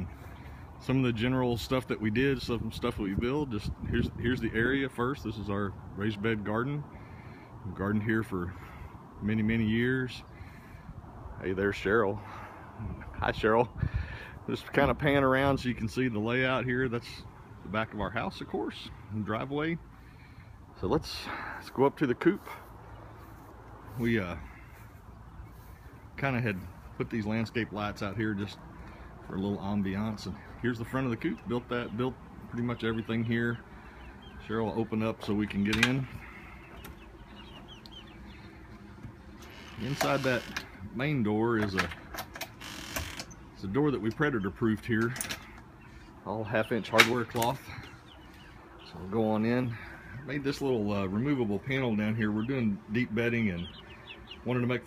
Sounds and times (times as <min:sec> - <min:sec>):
Speech: 0:00.8 - 0:06.9, 0:07.6 - 0:08.6, 0:09.2 - 0:10.3, 0:11.4 - 0:12.2, 0:12.8 - 0:13.8, 0:14.5 - 0:19.8, 0:20.8 - 0:22.6, 0:23.9 - 0:24.5, 0:26.2 - 0:28.6, 0:29.3 - 0:33.6, 0:34.4 - 0:36.2, 0:39.8 - 0:42.0, 0:43.6 - 0:45.3, 0:46.2 - 0:47.8, 0:48.9 - 0:53.8, 0:54.4 - 0:54.8.